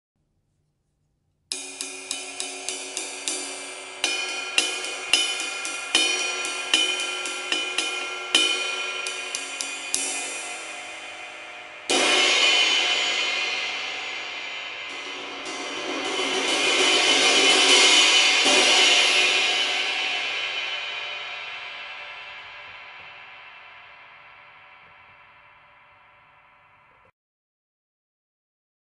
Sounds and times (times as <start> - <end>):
Hi-hat: 1.5 - 12.2.